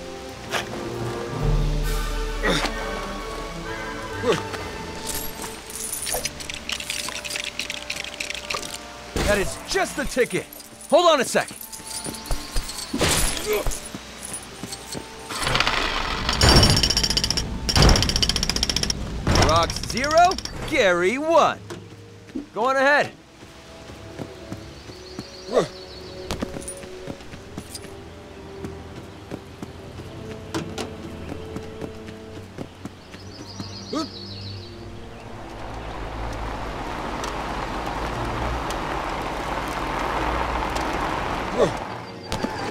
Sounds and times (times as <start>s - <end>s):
Music: 0.0s - 42.7s
Outside, rural or natural: 0.0s - 42.7s.